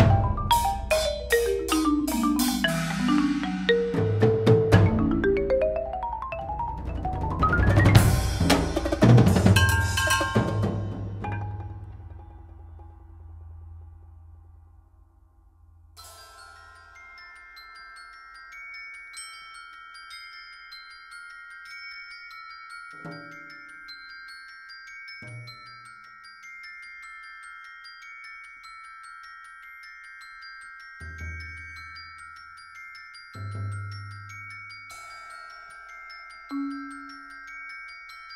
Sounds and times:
Marimba, xylophone: 0.0s - 13.5s, 16.0s - 38.3s.

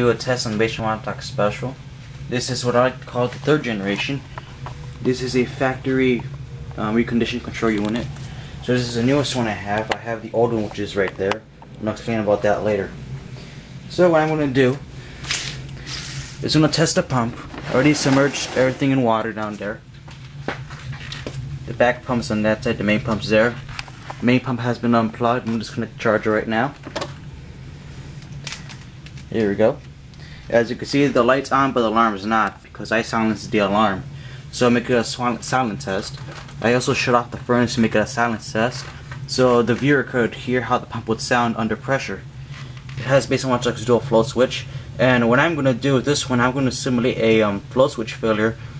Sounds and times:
Speech: 0.0s - 4.2s, 5.0s - 13.0s, 13.9s - 14.8s, 16.4s - 19.8s, 21.7s - 23.6s, 24.2s - 26.8s, 29.3s - 29.9s, 30.5s - 42.3s, 43.0s - 48.6s.

